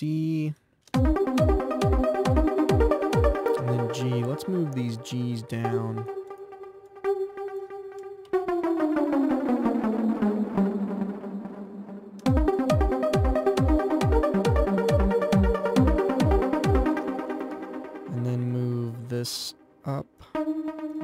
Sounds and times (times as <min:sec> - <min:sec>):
Speech: 0:00.0 - 0:00.6, 0:03.6 - 0:06.1, 0:18.1 - 0:20.4
Trance music: 0:01.0 - 0:18.7, 0:20.4 - 0:21.0.